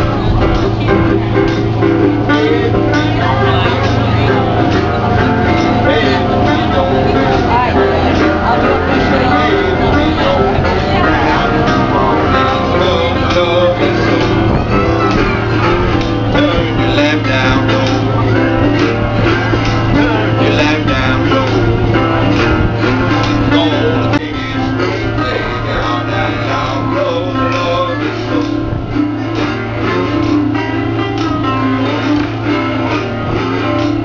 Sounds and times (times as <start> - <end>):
Strum: 0.0 - 34.0.